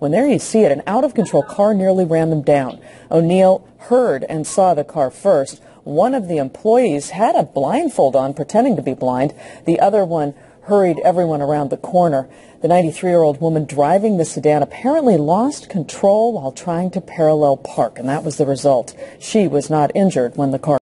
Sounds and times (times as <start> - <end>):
Speech: 0.0 - 20.8.